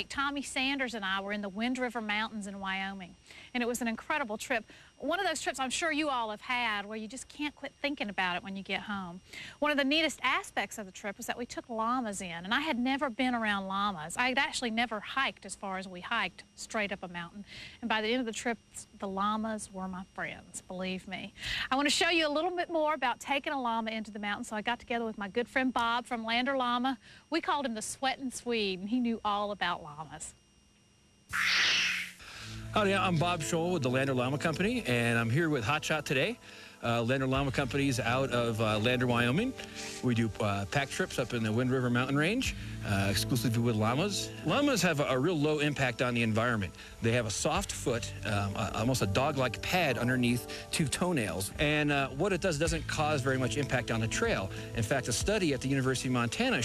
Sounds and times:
Music: 32.4 - 56.6
Speech: 32.8 - 56.6.

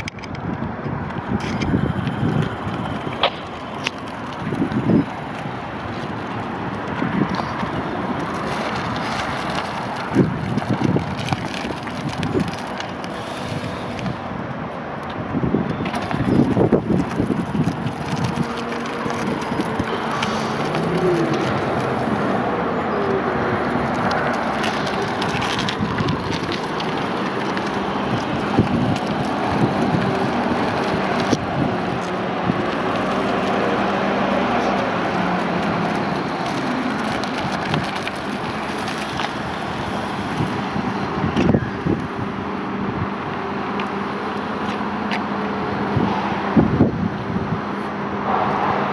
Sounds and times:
Outside, urban or manmade: 0.0 - 48.9
Vehicle: 0.0 - 48.9.

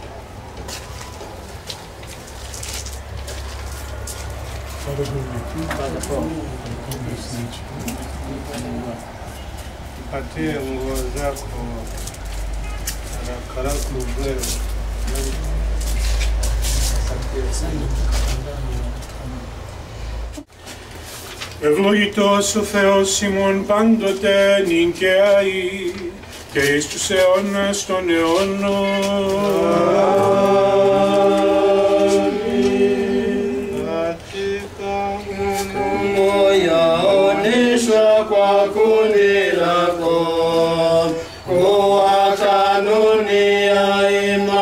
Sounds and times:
Speech: 4.8 - 9.1, 10.1 - 12.0, 13.2 - 15.7, 16.8 - 19.5.

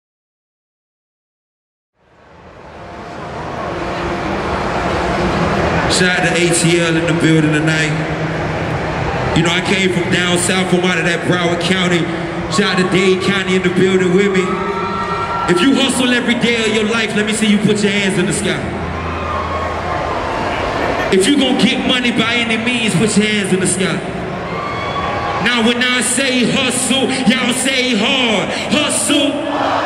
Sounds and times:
Speech: 5.9 - 8.0, 9.4 - 14.5, 15.5 - 18.7, 21.1 - 24.0, 25.4 - 29.5.

